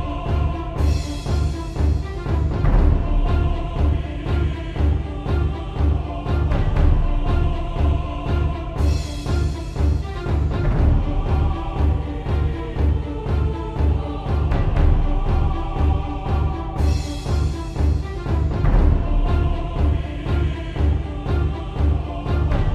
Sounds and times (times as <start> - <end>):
Soundtrack music: 0.0 - 22.7.